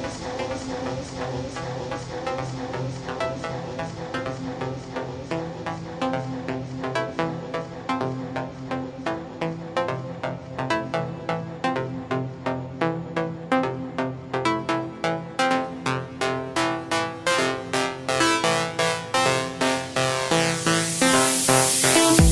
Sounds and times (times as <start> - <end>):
Music: 0.0 - 22.3.